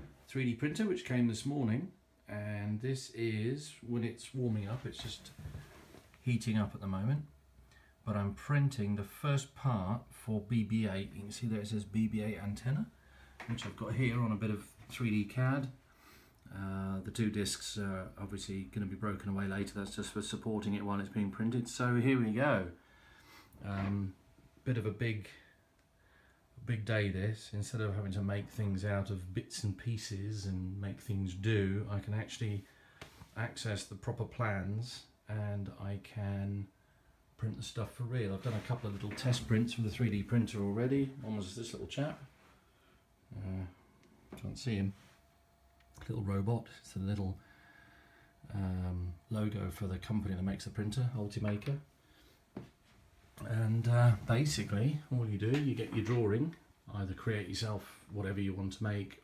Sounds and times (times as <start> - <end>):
Speech: 0.0 - 5.5, 6.2 - 7.4, 8.0 - 15.8, 16.4 - 22.8, 23.6 - 25.5, 26.6 - 32.7, 33.3 - 36.8, 37.4 - 42.4, 43.3 - 45.0, 46.0 - 47.4, 48.4 - 51.9, 53.4 - 59.2.